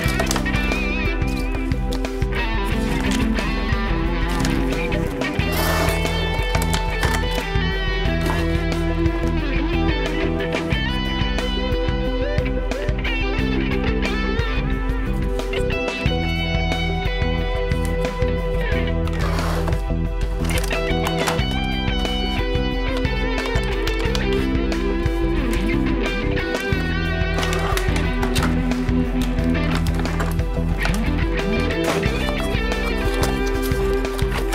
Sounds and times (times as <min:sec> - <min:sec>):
Music: 0:00.0 - 0:34.5.